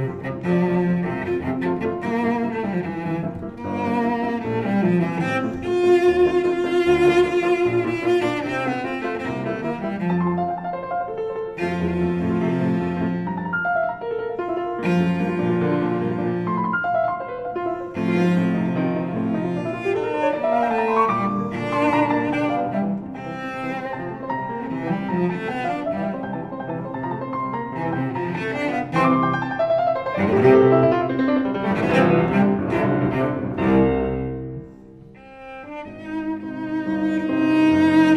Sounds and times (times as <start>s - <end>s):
Cello: 0.0s - 38.1s
Piano: 0.0s - 38.1s.